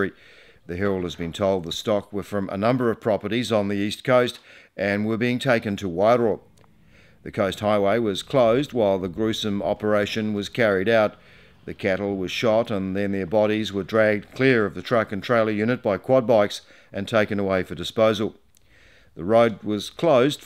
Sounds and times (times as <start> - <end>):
Speech: 0.0 - 6.4, 7.2 - 18.4, 19.2 - 20.4.